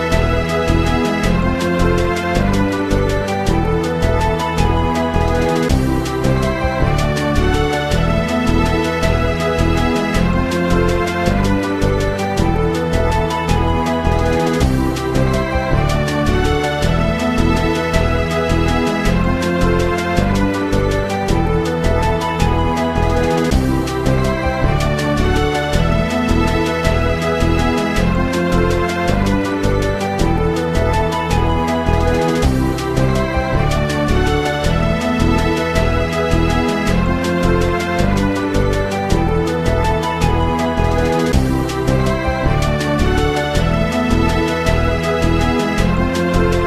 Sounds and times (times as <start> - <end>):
Video game music: 0.0 - 46.6.